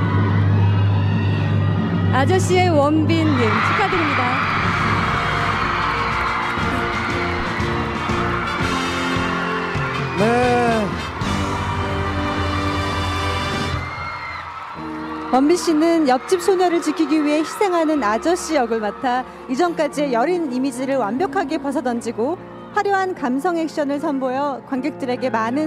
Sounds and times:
Music: 0.0 - 25.6.

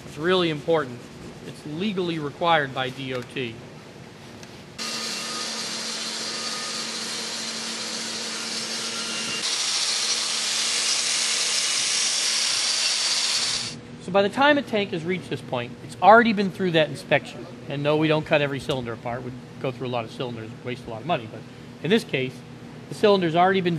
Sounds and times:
Speech: 0.1 - 3.6, 14.0 - 23.7.

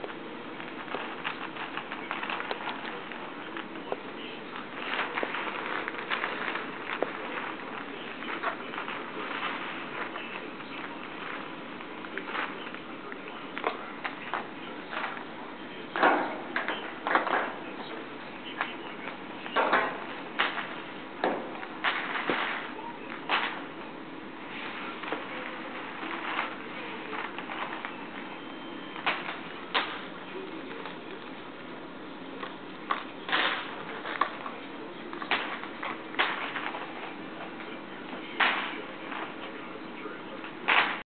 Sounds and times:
Speech: 1.4 - 41.0.

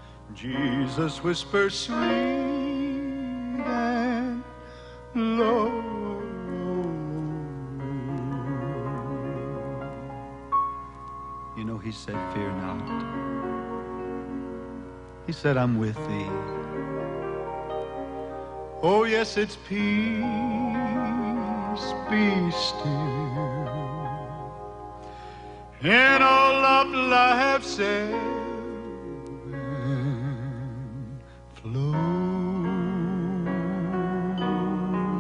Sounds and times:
Music: 0.0 - 35.2
Male singing: 0.3 - 10.2, 18.8 - 24.4, 25.8 - 35.2.

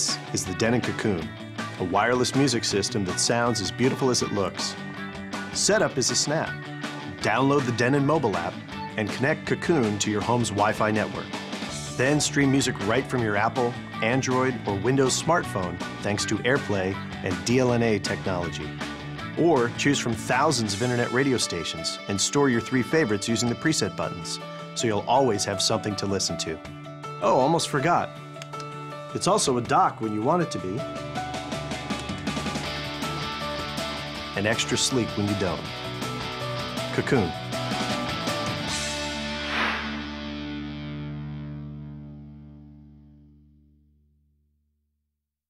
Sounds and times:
Speech: 0.0 - 4.8, 5.6 - 6.5, 7.2 - 18.7, 19.4 - 26.6, 27.2 - 28.1, 29.1 - 30.8, 34.4 - 35.7, 36.9 - 37.4.

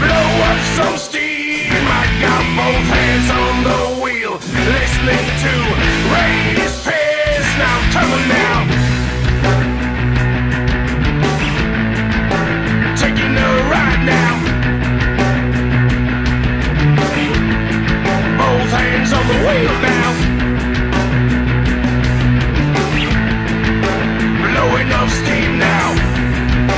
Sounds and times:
Funk: 0.0 - 26.7.

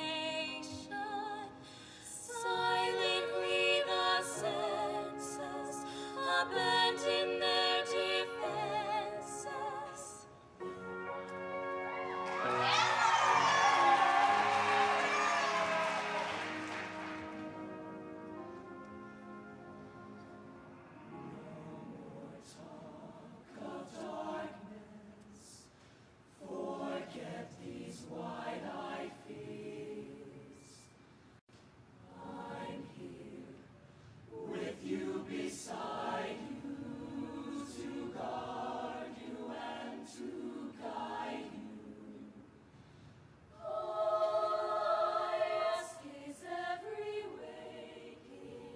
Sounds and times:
Music: 0.0 - 31.2, 32.1 - 48.7.

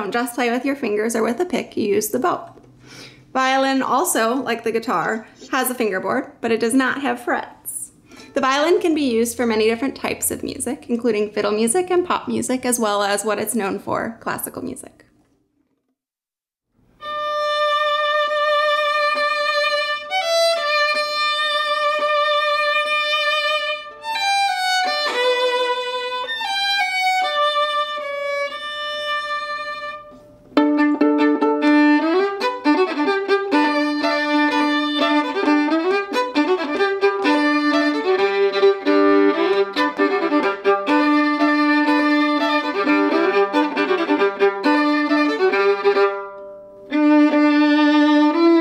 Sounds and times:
Speech: 0.0 - 2.5, 3.4 - 15.1
Violin, fiddle: 17.0 - 48.6.

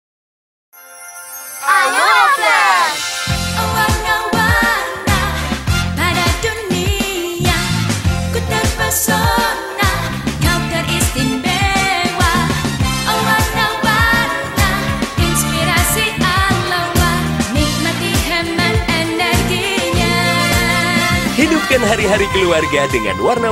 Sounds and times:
Music of Asia: 0.8 - 23.5.

